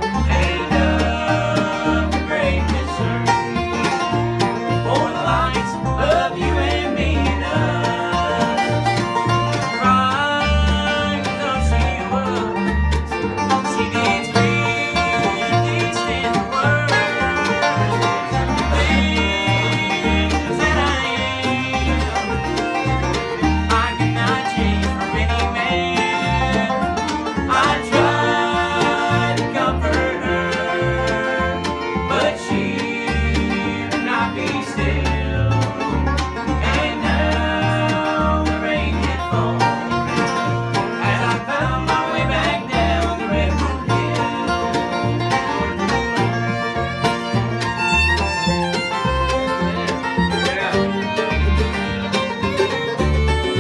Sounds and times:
Bluegrass: 0.0 - 53.6.

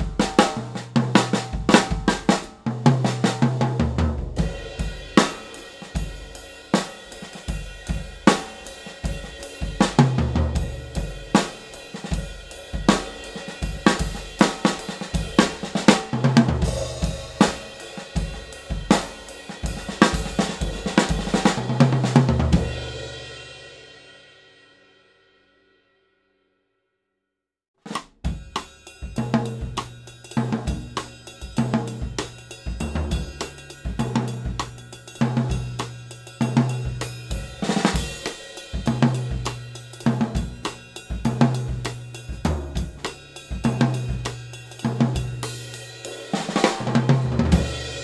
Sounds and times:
Bass drum: 0.0 - 6.3, 7.5 - 23.2, 27.9 - 45.7, 46.5 - 48.0
Drum kit: 0.0 - 24.6, 27.8 - 48.0.

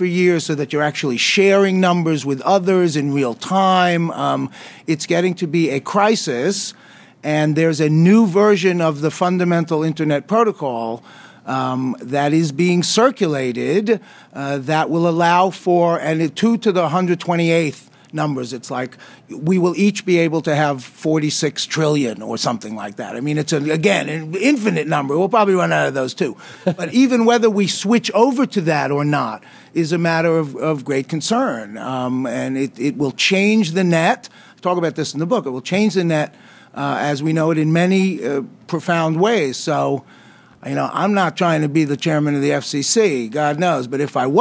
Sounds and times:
Speech: 0.0 - 40.0, 40.6 - 44.4.

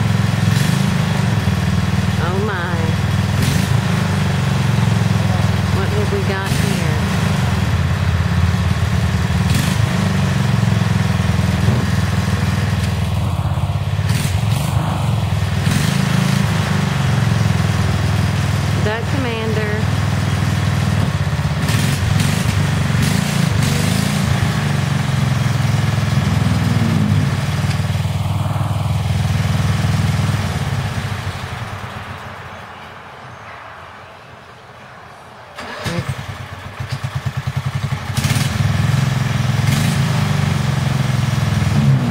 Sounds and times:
Speech: 2.2 - 3.0, 5.1 - 7.1, 18.8 - 19.9.

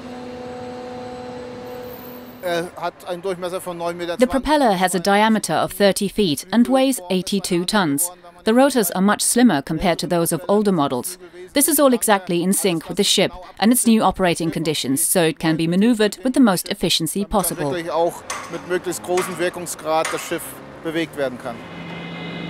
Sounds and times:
Speech: 2.4 - 21.6.

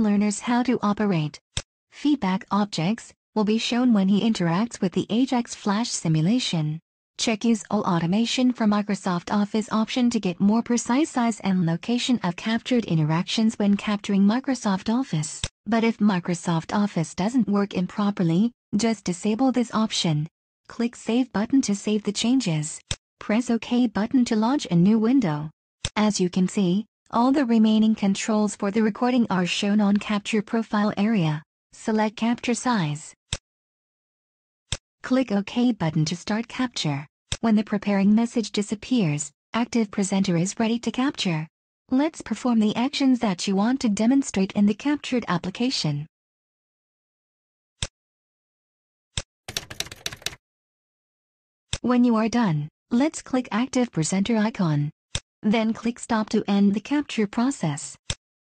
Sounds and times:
Speech: 0.0 - 1.4, 2.0 - 33.2, 35.0 - 46.1, 51.8 - 58.0.

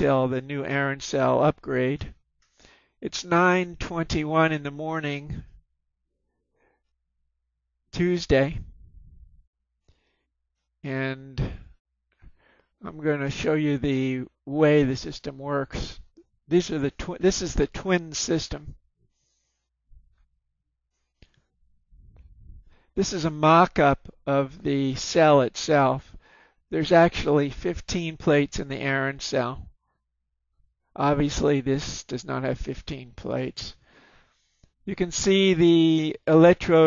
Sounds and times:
Speech: 0.0 - 2.2, 3.0 - 5.6, 7.9 - 8.8, 10.8 - 11.8, 12.8 - 18.8, 23.0 - 29.7, 31.0 - 33.8, 34.9 - 36.8.

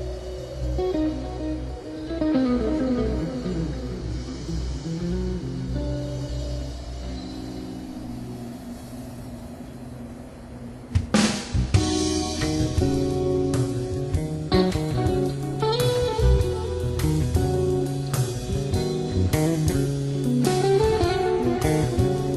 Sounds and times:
Music: 0.0 - 22.3.

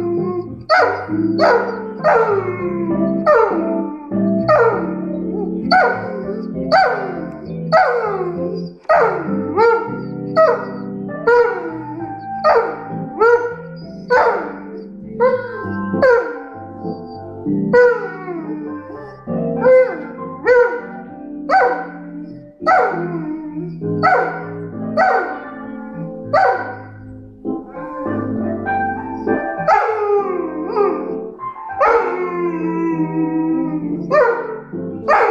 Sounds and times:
Blues: 0.0 - 35.3.

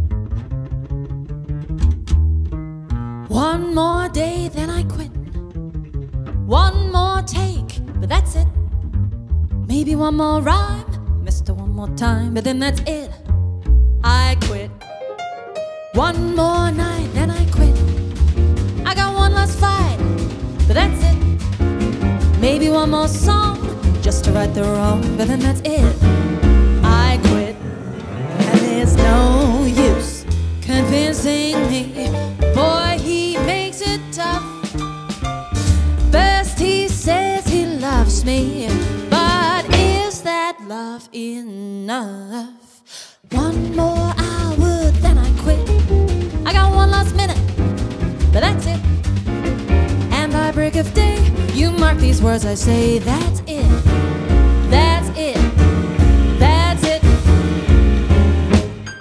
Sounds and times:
Rhythm and blues: 13.6 - 40.4, 43.3 - 59.0.

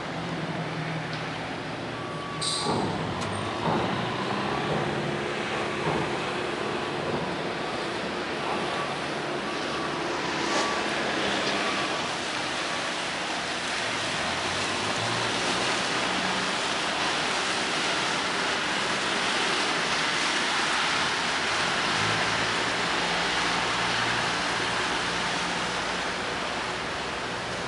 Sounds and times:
Boat, Water vehicle: 0.0 - 27.6.

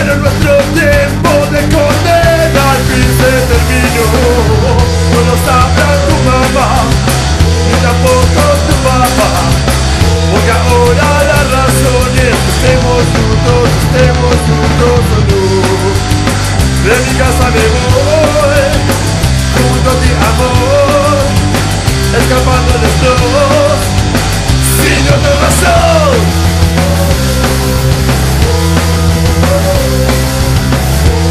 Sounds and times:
Punk rock: 0.0 - 31.3.

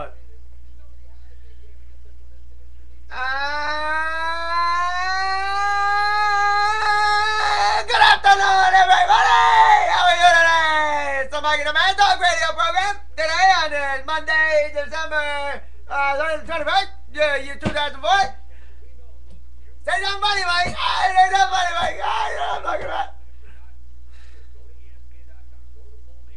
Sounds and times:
Speech: 0.0 - 5.5, 6.8 - 26.3.

